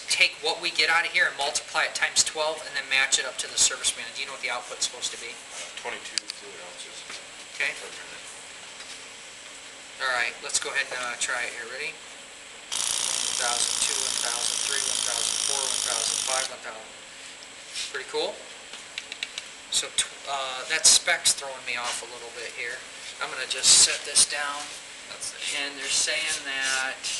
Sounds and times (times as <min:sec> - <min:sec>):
Speech: 0:00.1 - 0:08.3, 0:10.0 - 0:12.0, 0:13.1 - 0:17.0, 0:17.9 - 0:18.5, 0:19.7 - 0:27.1.